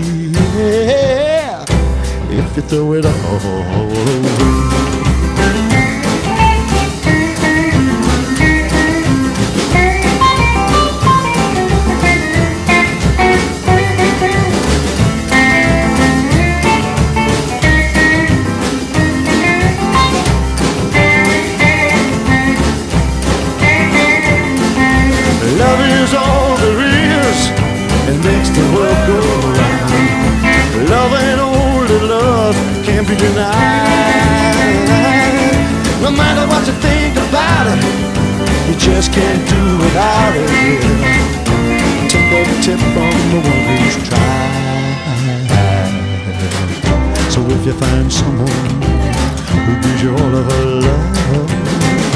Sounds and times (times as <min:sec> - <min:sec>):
Country: 0:00.0 - 0:52.1
Jazz: 0:00.0 - 0:52.1
Plucked string instrument: 0:00.1 - 0:52.1.